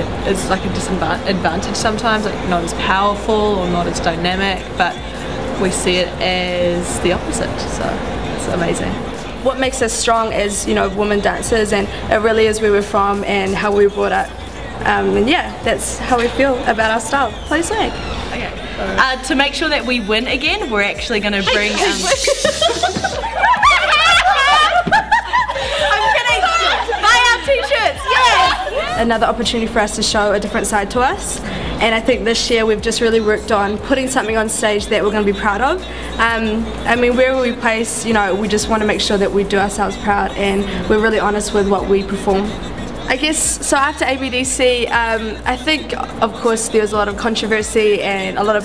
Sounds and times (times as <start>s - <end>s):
Music: 0.0s - 48.6s
Snicker: 22.1s - 28.8s.